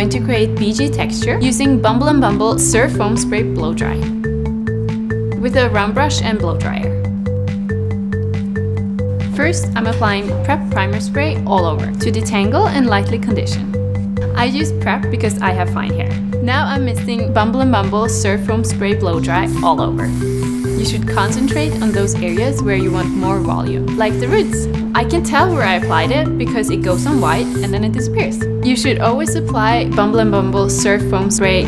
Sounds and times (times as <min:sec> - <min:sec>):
Speech: 0:00.0 - 0:04.1, 0:05.4 - 0:07.0, 0:09.4 - 0:13.7, 0:14.4 - 0:20.1, 0:20.8 - 0:31.6
Music: 0:00.0 - 0:31.6
Spray: 0:19.5 - 0:26.2, 0:26.8 - 0:28.0.